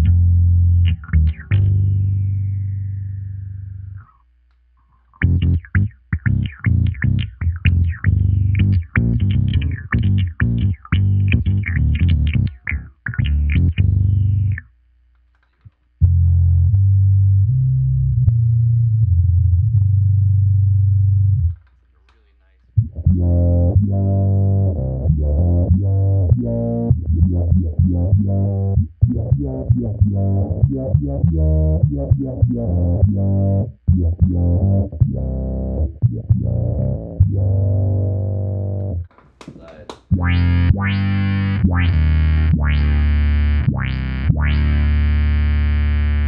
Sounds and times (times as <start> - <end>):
Effects unit: 0.0 - 21.8, 22.7 - 39.2, 40.1 - 46.2.